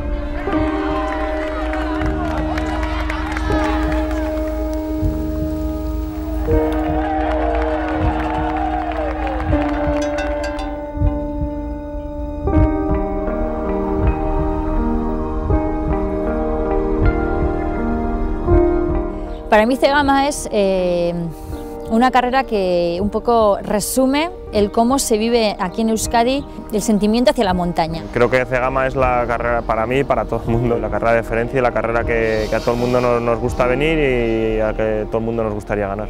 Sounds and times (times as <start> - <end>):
Outside, rural or natural: 0.0 - 35.7
Music: 0.0 - 36.0.